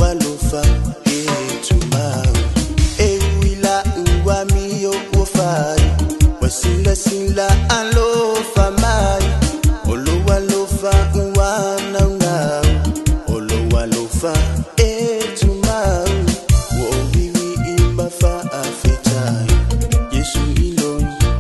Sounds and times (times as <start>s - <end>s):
Music: 0.0s - 21.4s.